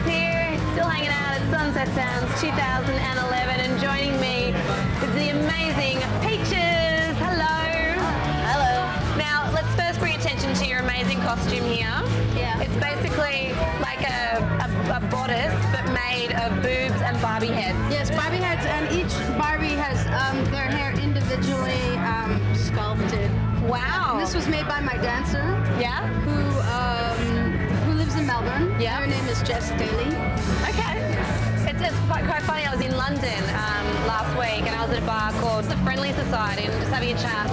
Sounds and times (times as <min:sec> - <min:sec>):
Music: 0:00.0 - 0:37.5.